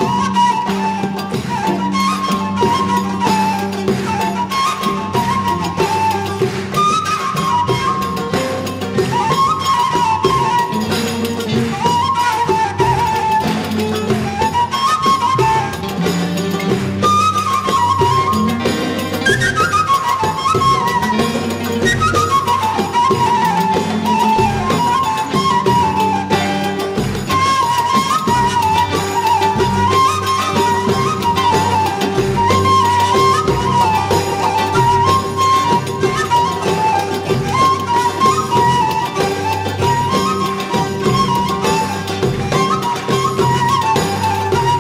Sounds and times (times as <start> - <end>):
Orchestra: 0.0 - 44.8
Percussion: 0.0 - 44.8.